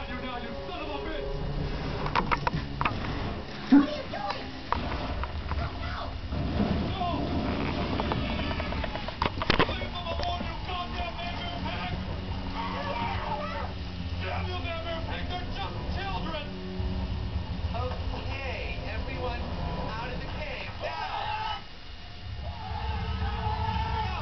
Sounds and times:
Speech: 0:06.9 - 0:07.3, 0:09.6 - 0:16.5, 0:17.8 - 0:21.6.

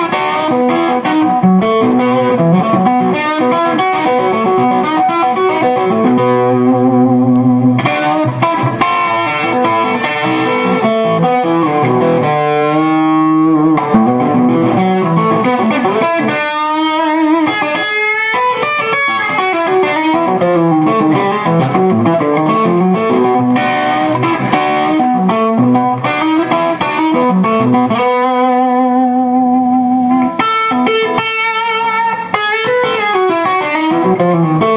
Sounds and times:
Music: 0:00.0 - 0:34.7.

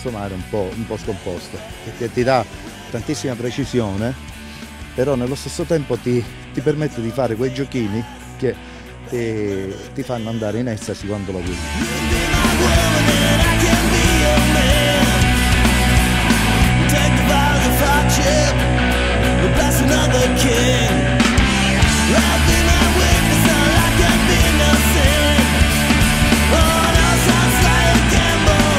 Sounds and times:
Punk rock: 0:00.0 - 0:09.1, 0:09.7 - 0:28.7.

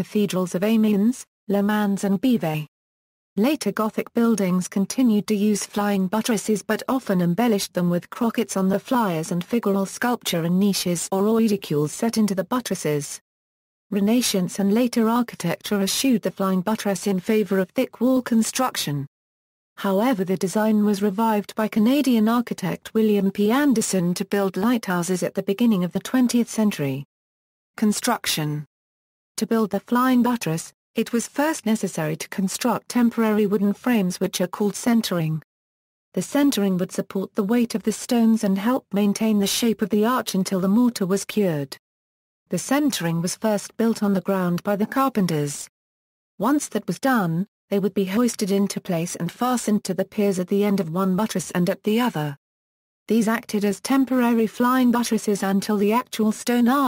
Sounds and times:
Speech: 0:00.0 - 0:02.7, 0:03.4 - 0:13.2, 0:13.9 - 0:19.1, 0:19.8 - 0:27.1, 0:27.8 - 0:28.7, 0:29.4 - 0:35.4, 0:36.2 - 0:41.8, 0:42.5 - 0:45.7, 0:46.4 - 0:52.4, 0:53.1 - 0:56.8.

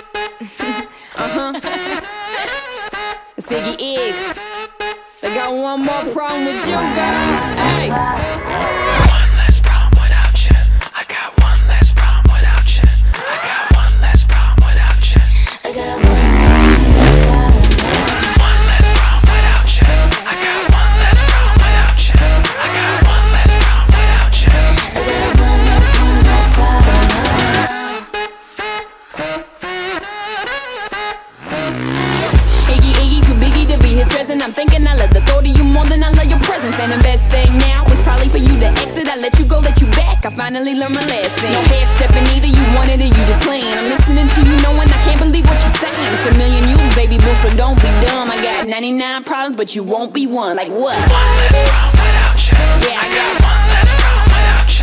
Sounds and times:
Music: 0:00.0 - 0:50.3, 0:50.9 - 0:54.8.

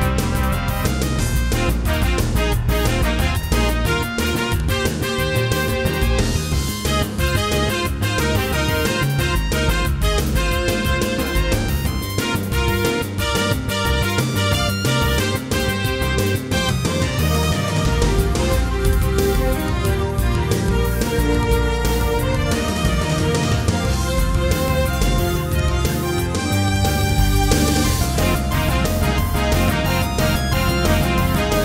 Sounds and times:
Music: 0:00.0 - 0:31.6.

